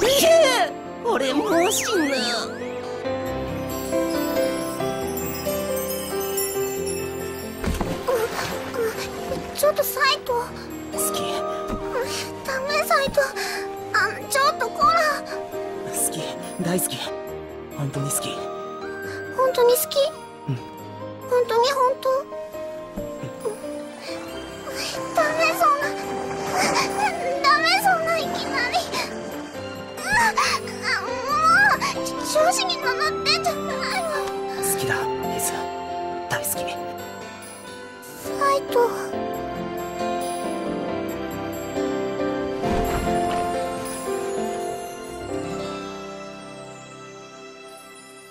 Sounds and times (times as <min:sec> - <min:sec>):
Tender music: 0:00.0 - 0:48.3.